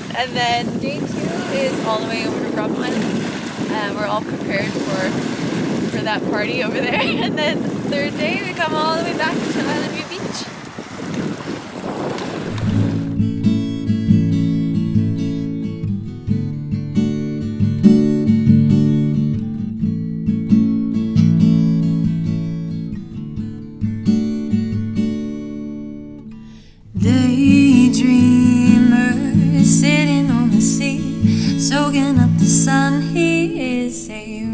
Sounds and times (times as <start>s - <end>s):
Speech: 0.0s - 3.0s, 3.7s - 5.1s, 6.0s - 10.5s
Boat, Water vehicle: 0.0s - 15.6s, 26.7s - 34.5s
Music: 12.6s - 34.5s.